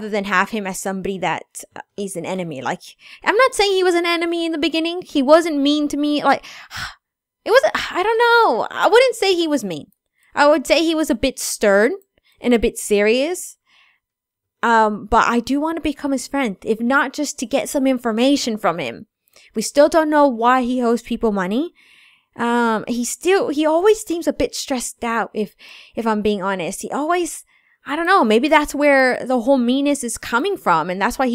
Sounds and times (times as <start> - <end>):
Narration, monologue: 0.0 - 31.3.